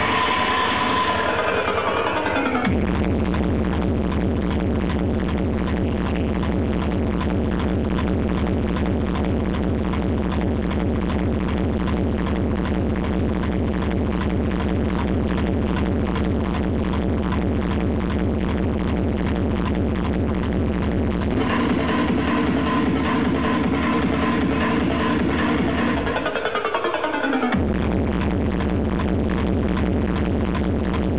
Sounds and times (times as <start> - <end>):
Techno: 0.0 - 31.1.